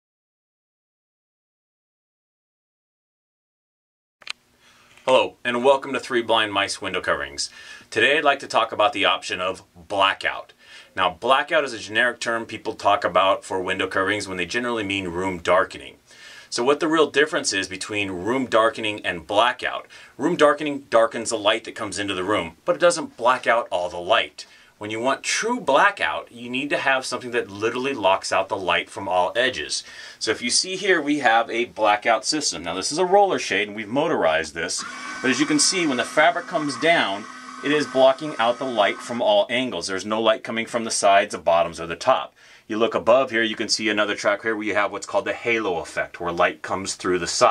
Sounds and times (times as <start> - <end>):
Speech: 5.1 - 47.5.